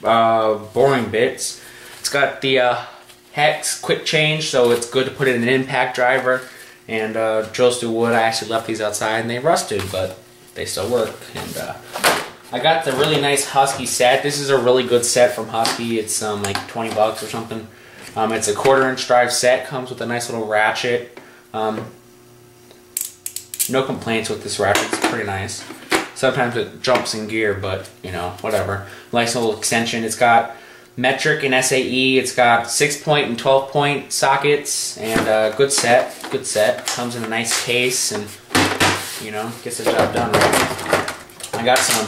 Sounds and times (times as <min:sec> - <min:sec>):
Speech: 0:00.0 - 0:11.8, 0:12.5 - 0:22.0, 0:23.7 - 0:38.4, 0:39.2 - 0:40.8, 0:41.5 - 0:42.0.